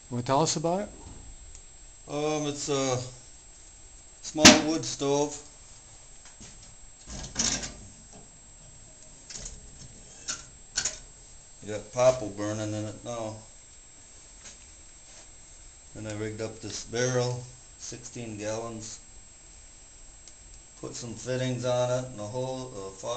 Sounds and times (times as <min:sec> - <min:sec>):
Speech: 0:00.1 - 0:01.0, 0:02.1 - 0:03.2, 0:04.2 - 0:05.5, 0:11.6 - 0:13.5, 0:16.0 - 0:19.0, 0:20.8 - 0:23.1.